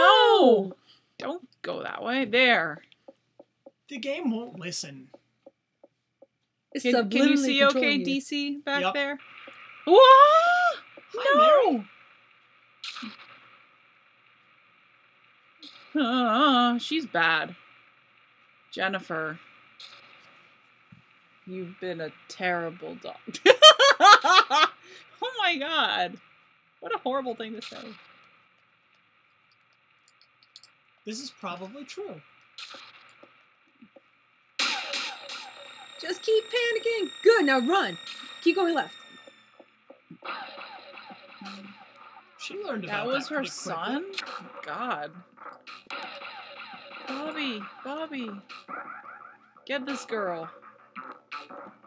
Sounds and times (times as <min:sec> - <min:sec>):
Speech: 0:00.0 - 0:02.8, 0:03.9 - 0:05.0, 0:06.8 - 0:09.2, 0:09.9 - 0:11.8, 0:16.0 - 0:17.6, 0:18.8 - 0:19.4, 0:21.5 - 0:26.2, 0:26.8 - 0:28.0, 0:31.1 - 0:32.2, 0:36.0 - 0:38.9, 0:41.4 - 0:41.7, 0:42.4 - 0:45.2, 0:47.1 - 0:48.4, 0:49.7 - 0:50.5.